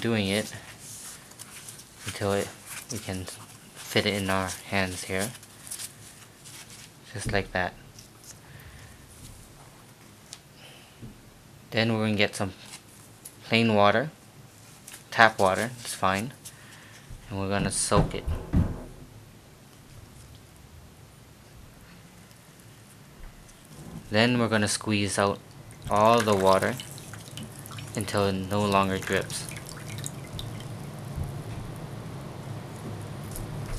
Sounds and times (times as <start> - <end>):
Speech: 0.0 - 0.6, 2.1 - 5.4, 7.1 - 7.8, 11.7 - 12.6, 13.4 - 14.2, 15.1 - 16.4, 17.3 - 18.4, 24.1 - 26.8, 28.0 - 29.5
Inside, small room: 0.0 - 33.7.